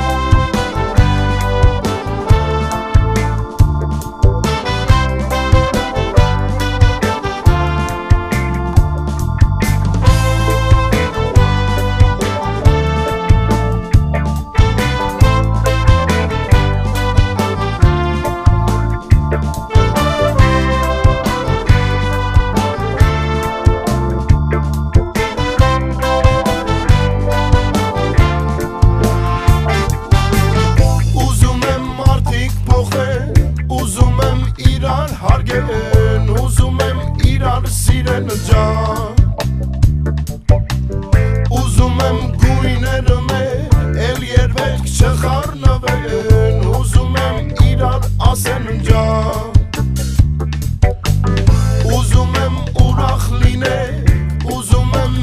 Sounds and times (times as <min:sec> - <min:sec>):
Music: 0:00.0 - 0:55.2.